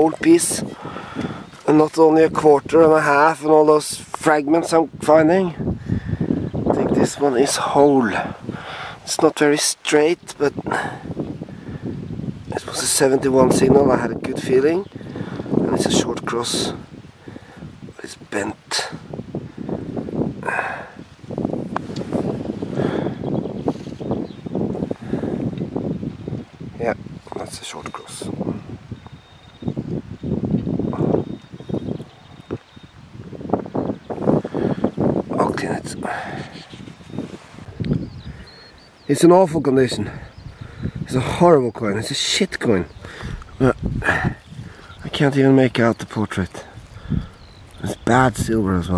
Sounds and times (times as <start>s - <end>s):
Speech: 0.0s - 0.7s, 1.6s - 5.6s, 6.7s - 8.3s, 9.1s - 10.7s, 12.5s - 14.9s, 15.7s - 16.8s, 18.0s - 19.0s, 26.8s - 28.4s, 35.3s - 36.1s, 39.1s - 40.2s, 41.1s - 42.9s, 45.0s - 46.7s, 47.8s - 48.9s.